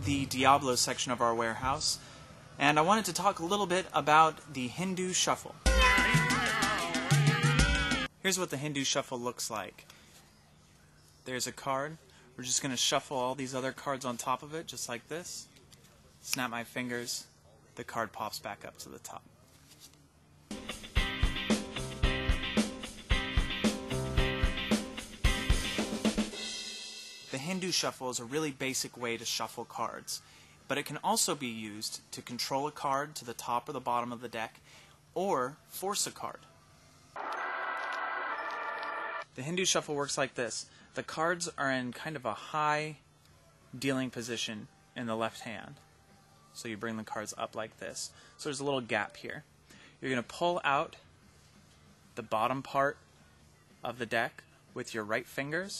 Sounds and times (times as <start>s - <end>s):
Speech: 0.0s - 2.0s, 2.6s - 5.6s, 8.2s - 9.8s, 11.2s - 19.4s, 27.3s - 34.6s, 35.2s - 36.5s, 39.4s - 43.0s, 43.8s - 45.8s, 46.6s - 51.1s, 52.2s - 53.0s, 53.8s - 55.8s
Music: 5.6s - 8.1s, 20.5s - 27.9s, 43.0s - 55.8s.